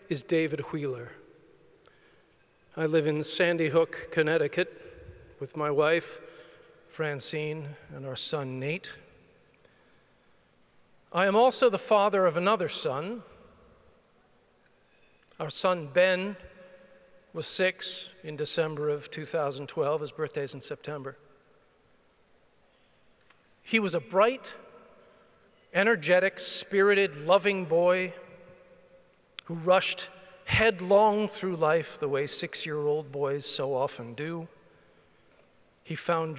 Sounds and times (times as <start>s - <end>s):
Male speech, man speaking: 0.0s - 1.2s, 2.8s - 4.7s, 5.4s - 6.2s, 6.9s - 9.1s, 11.1s - 13.3s, 15.4s - 16.5s, 17.4s - 21.2s, 23.7s - 24.6s, 25.8s - 28.2s, 29.4s - 34.5s, 35.9s - 36.3s.